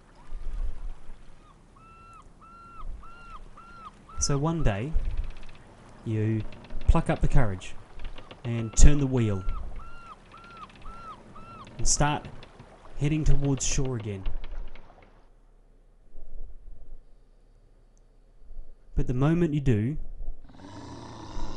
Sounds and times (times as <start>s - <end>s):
Outside, rural or natural: 0.0s - 21.5s
Speech: 4.2s - 5.0s, 6.1s - 7.8s, 8.5s - 9.5s, 11.8s - 12.3s, 13.0s - 14.3s, 19.0s - 20.0s.